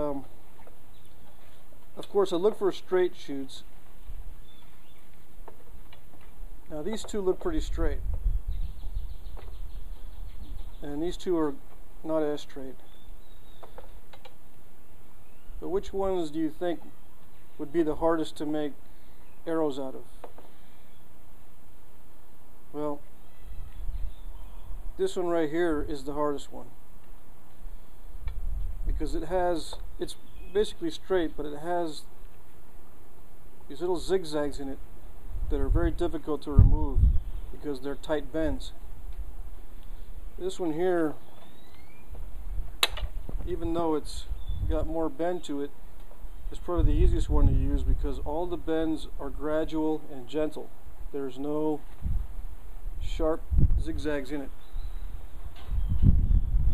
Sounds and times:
Speech: 0:00.0 - 0:00.3, 0:02.0 - 0:03.7, 0:06.7 - 0:08.0, 0:10.8 - 0:12.8, 0:15.6 - 0:16.9, 0:17.6 - 0:18.8, 0:19.5 - 0:20.1, 0:22.8 - 0:23.0, 0:25.0 - 0:26.7, 0:28.9 - 0:32.1, 0:33.7 - 0:34.8, 0:35.5 - 0:37.0, 0:37.6 - 0:38.8, 0:40.4 - 0:41.2, 0:43.5 - 0:45.7, 0:46.5 - 0:51.8, 0:53.0 - 0:54.6.

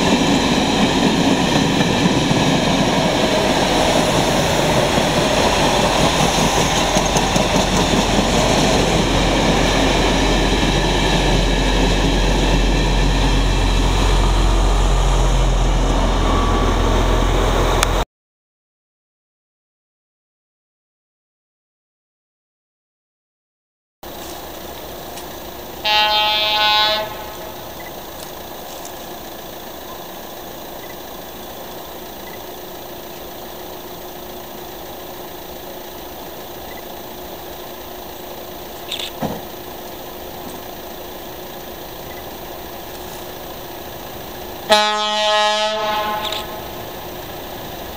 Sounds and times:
Railroad car, train wagon: 0:00.0 - 0:18.0, 0:24.0 - 0:47.9
Train: 0:00.0 - 0:18.1, 0:24.0 - 0:47.9
Air horn, truck horn: 0:25.8 - 0:27.6, 0:44.7 - 0:46.7.

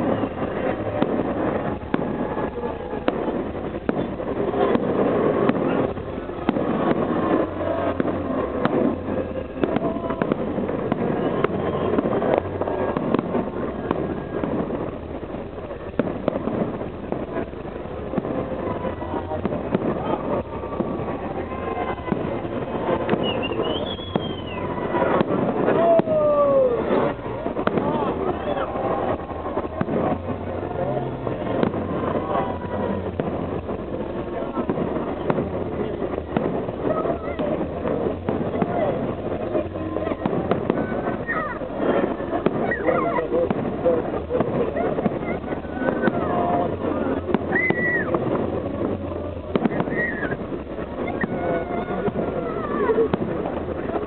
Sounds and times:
Fireworks: 0:00.0 - 0:54.0
Speech: 0:17.3 - 0:54.0.

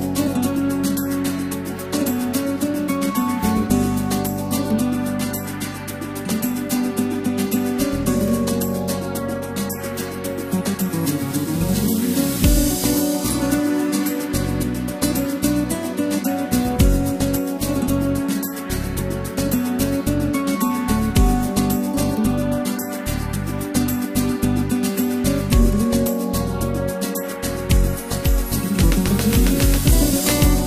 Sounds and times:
Music: 0:00.0 - 0:30.6.

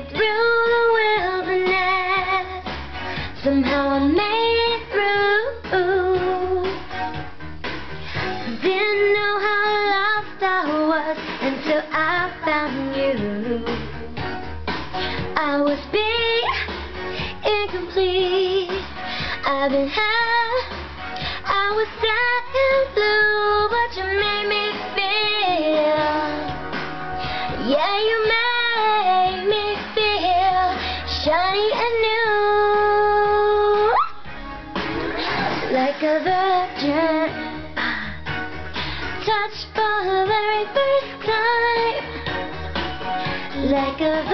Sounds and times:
Female singing: 0:00.0 - 0:02.7, 0:03.4 - 0:06.8, 0:08.5 - 0:14.1, 0:15.3 - 0:16.8, 0:17.4 - 0:20.8, 0:21.4 - 0:26.6, 0:27.6 - 0:34.0, 0:35.7 - 0:37.7, 0:39.2 - 0:42.3, 0:43.6 - 0:44.3
Music: 0:00.0 - 0:44.3.

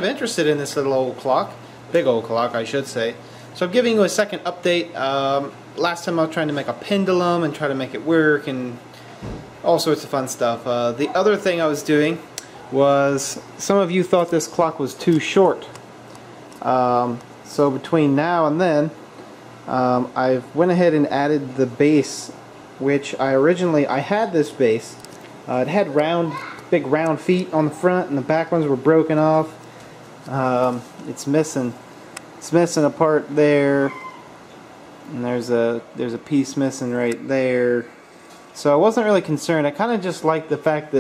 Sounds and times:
Speech: 0:00.0 - 0:08.8, 0:09.6 - 0:15.8, 0:16.6 - 0:19.0, 0:19.7 - 0:29.6, 0:30.3 - 0:31.8, 0:32.4 - 0:34.0, 0:35.1 - 0:37.9, 0:38.6 - 0:41.0.

